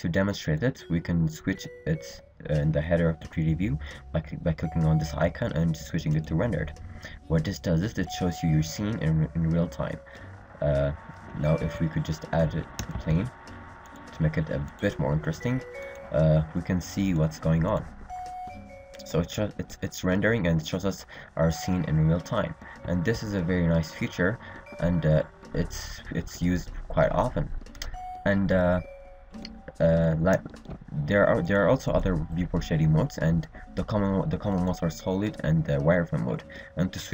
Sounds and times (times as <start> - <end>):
Speech: 0.0 - 10.0, 10.6 - 13.3, 14.2 - 17.9, 19.0 - 27.5, 28.3 - 28.9, 29.7 - 37.1.